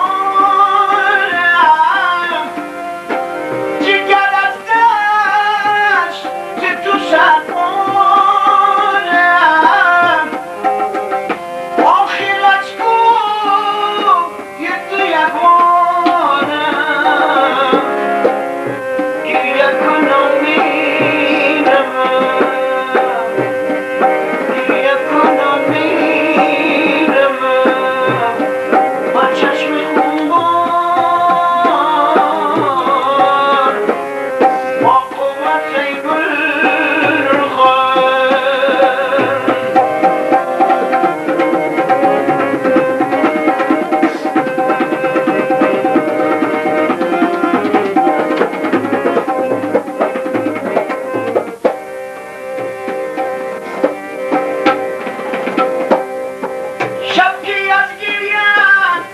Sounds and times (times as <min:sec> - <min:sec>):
Tabla: 0:00.0 - 0:59.1.